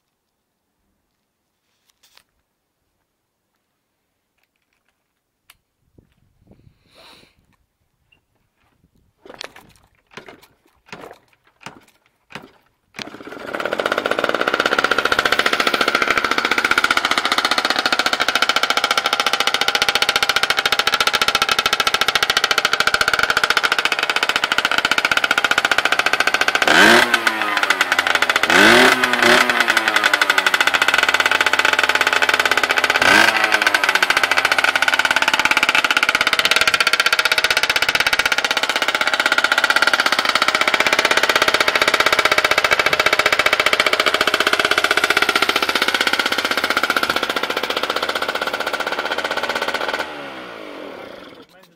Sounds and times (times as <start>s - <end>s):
Rattle: 9.2s - 51.7s.